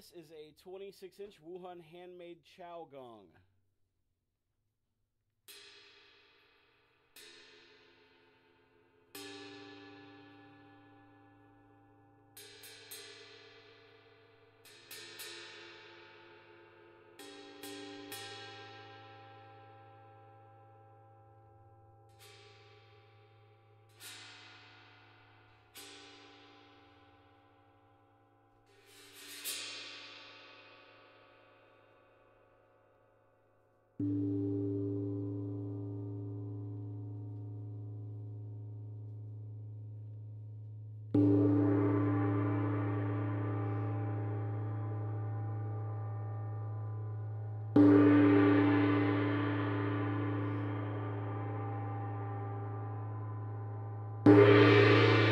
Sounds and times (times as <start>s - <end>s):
Music: 5.4s - 55.3s.